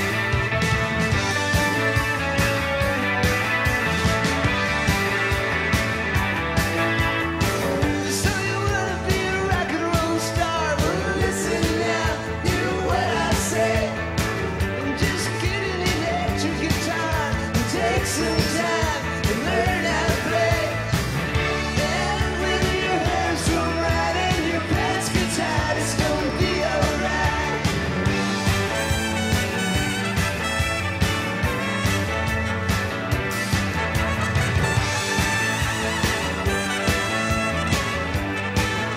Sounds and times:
Music: 0.0 - 38.9.

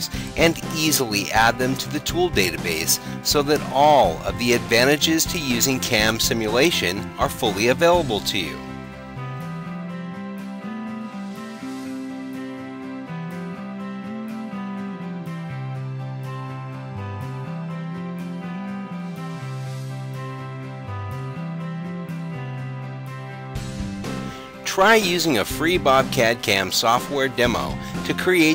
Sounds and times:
Speech: 0.0 - 8.6, 24.7 - 28.5
Music: 0.0 - 28.5.

